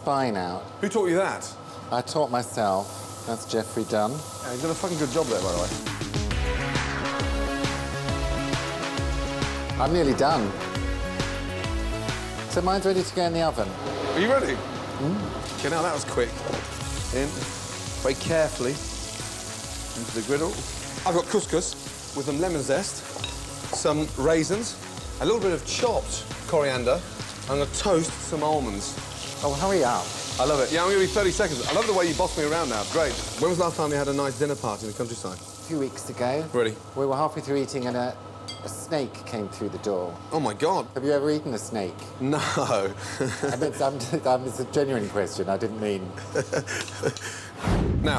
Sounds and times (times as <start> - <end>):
Sizzle: 0.8 - 38.9.